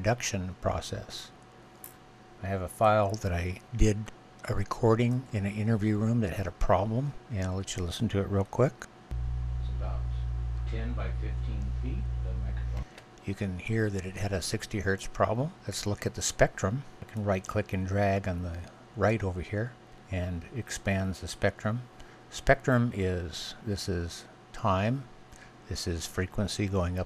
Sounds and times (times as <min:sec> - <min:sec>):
Speech: 0:00.0 - 0:01.4, 0:02.4 - 0:08.9, 0:09.6 - 0:25.1, 0:25.7 - 0:27.0.